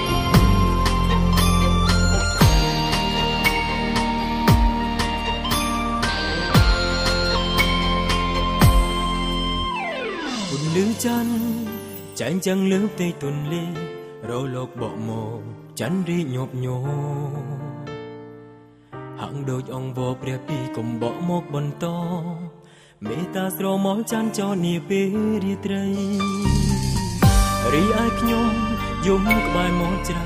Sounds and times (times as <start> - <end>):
Soul music: 0.0 - 30.2
Singing: 27.6 - 30.2.